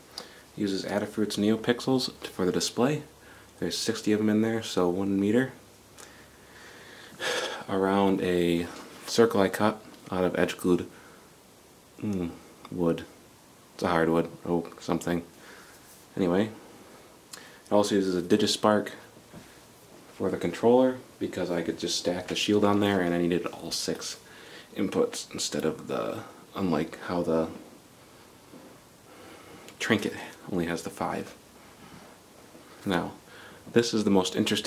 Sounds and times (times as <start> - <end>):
Speech: 0.6 - 5.6, 7.6 - 10.9, 12.0 - 13.2, 13.8 - 15.3, 16.1 - 16.6, 17.7 - 19.1, 20.1 - 27.6, 29.8 - 31.4, 32.8 - 34.6.